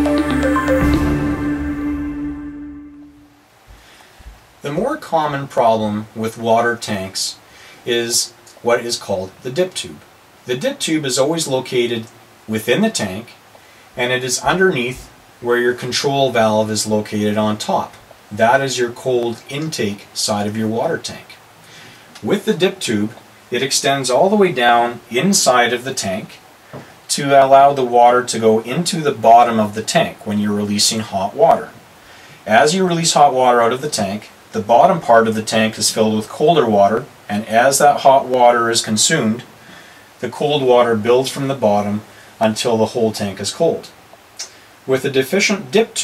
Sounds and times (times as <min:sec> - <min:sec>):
Speech: 0:04.6 - 0:13.4, 0:14.0 - 0:21.4, 0:22.2 - 0:26.4, 0:27.1 - 0:31.8, 0:32.4 - 0:39.5, 0:40.2 - 0:46.0.